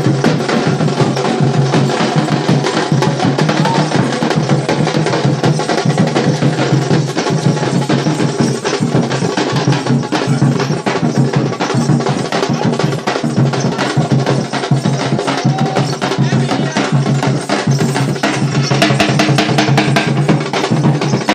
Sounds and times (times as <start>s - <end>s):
Music: 0.0s - 21.3s
Speech: 3.4s - 4.2s, 9.5s - 10.9s, 12.3s - 14.2s, 15.2s - 17.3s.